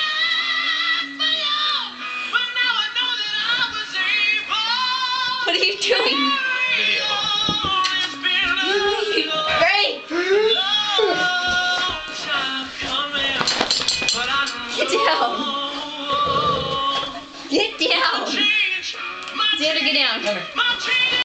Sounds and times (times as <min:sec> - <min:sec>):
Music: 0:00.0 - 0:21.2.